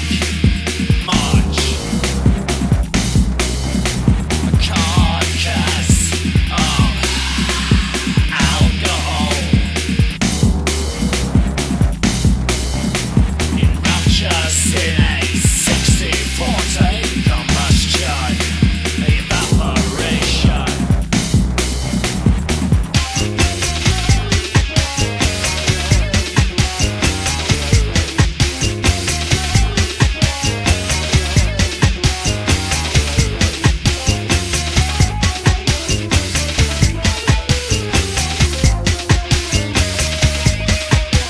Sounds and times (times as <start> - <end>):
Disco: 0.0 - 41.2
Rock music: 0.0 - 41.2.